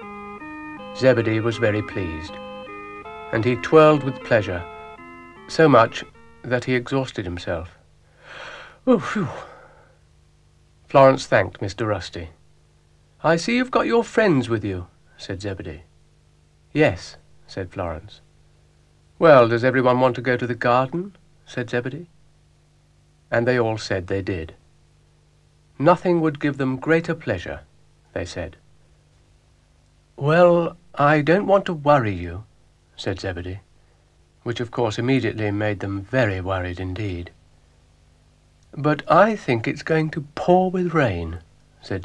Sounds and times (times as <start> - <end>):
Speech: 1.0 - 2.4, 3.3 - 4.7, 5.5 - 7.8, 8.8 - 9.5, 10.9 - 12.4, 13.2 - 15.9, 16.7 - 18.3, 19.2 - 22.1, 23.3 - 24.6, 25.8 - 28.6, 30.2 - 33.7, 34.4 - 37.4, 38.7 - 42.0.